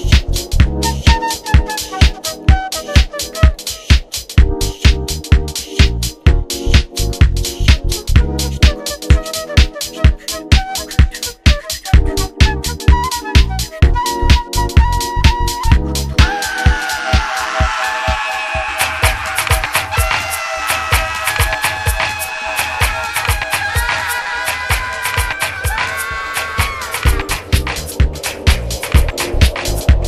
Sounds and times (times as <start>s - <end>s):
House music: 0.0s - 30.0s.